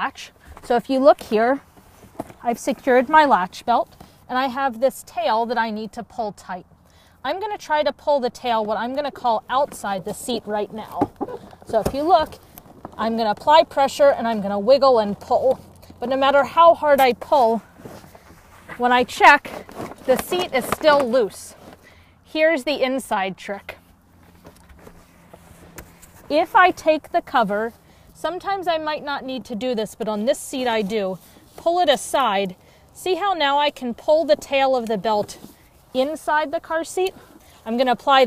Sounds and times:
Speech: 0:00.0 - 0:01.6, 0:02.4 - 0:06.6, 0:07.2 - 0:11.1, 0:11.7 - 0:12.4, 0:13.0 - 0:17.6, 0:18.7 - 0:21.6, 0:22.3 - 0:23.8, 0:26.3 - 0:38.2.

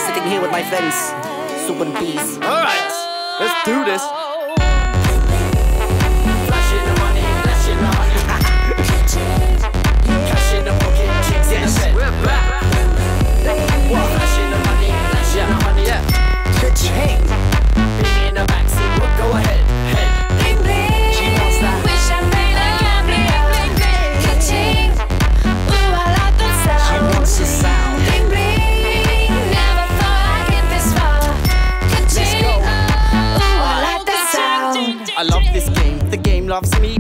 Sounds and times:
Music: 0:00.0 - 0:37.0.

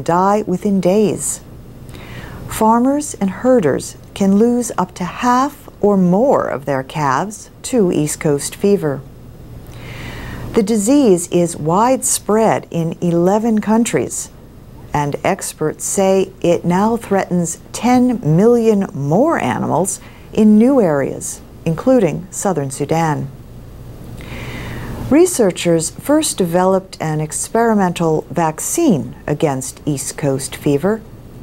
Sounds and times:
Speech: 0:00.0 - 0:01.5, 0:02.5 - 0:09.1, 0:10.5 - 0:23.4, 0:25.1 - 0:31.1.

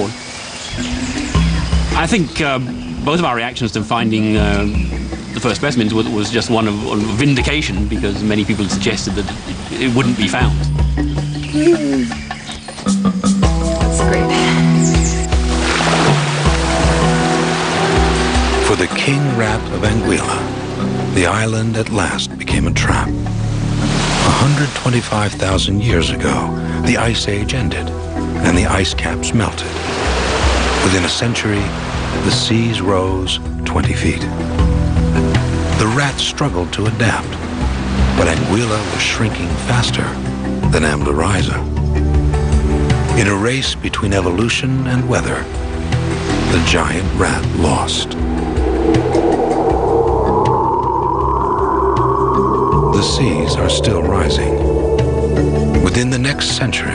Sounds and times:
Music: 0:00.0 - 0:56.9
Speech: 0:02.0 - 0:04.8, 0:05.4 - 0:10.7, 0:11.6 - 0:12.2, 0:18.6 - 0:20.5, 0:21.1 - 0:23.1, 0:24.2 - 0:29.8, 0:30.8 - 0:34.3, 0:35.8 - 0:37.4, 0:38.2 - 0:41.7, 0:43.2 - 0:45.5, 0:46.5 - 0:48.2, 0:52.9 - 0:54.6, 0:55.8 - 0:56.9.

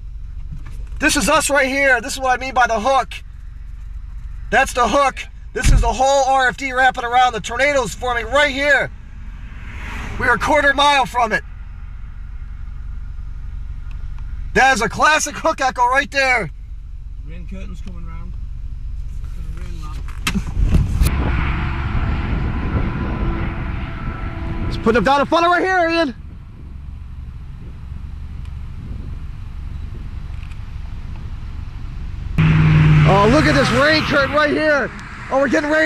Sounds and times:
Speech: 0:01.0 - 0:03.2, 0:04.5 - 0:08.9, 0:10.2 - 0:11.4, 0:14.6 - 0:16.5, 0:17.2 - 0:18.4, 0:19.3 - 0:20.1, 0:24.7 - 0:26.2, 0:33.1 - 0:35.8.

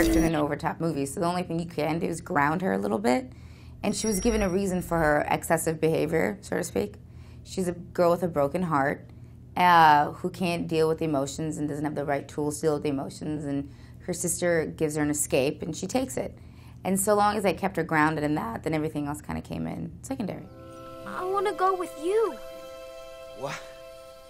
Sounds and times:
Speech: 0:00.0 - 0:09.0, 0:09.6 - 0:16.3, 0:16.9 - 0:20.5.

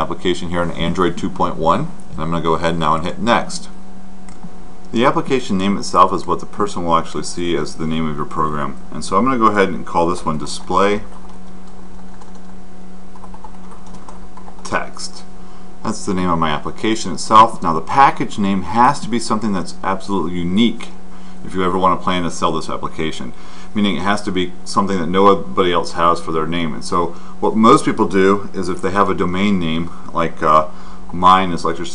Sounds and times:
Speech: 0:00.0 - 0:03.8, 0:04.9 - 0:11.1, 0:14.6 - 0:31.9
Typing: 0:11.1 - 0:12.6, 0:13.2 - 0:14.7.

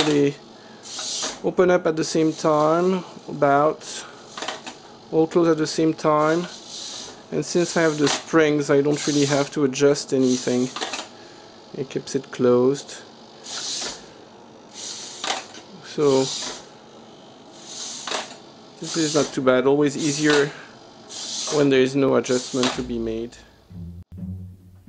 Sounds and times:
Speech: 0:00.0 - 0:00.4, 0:01.4 - 0:04.0, 0:05.1 - 0:06.5, 0:07.3 - 0:10.8, 0:11.7 - 0:13.1, 0:15.8 - 0:16.4, 0:18.8 - 0:20.6, 0:21.5 - 0:23.5
Inside, small room: 0:00.0 - 0:24.8.

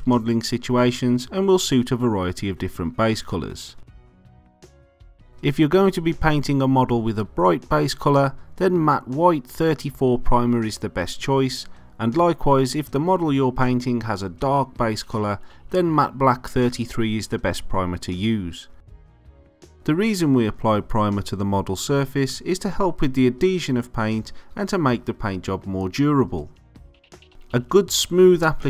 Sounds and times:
Speech: 0:00.0 - 0:03.8, 0:05.4 - 0:18.7, 0:19.8 - 0:26.6, 0:27.6 - 0:28.6
Music: 0:00.0 - 0:28.6.

